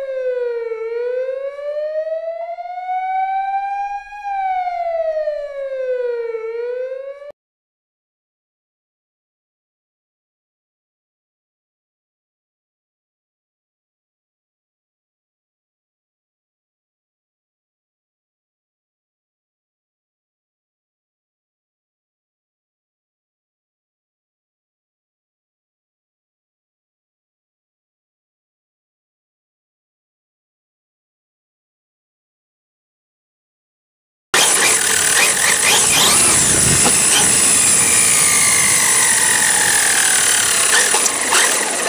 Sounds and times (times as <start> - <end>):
Outside, rural or natural: 0.0 - 6.4, 34.4 - 41.8
Car: 34.4 - 41.8.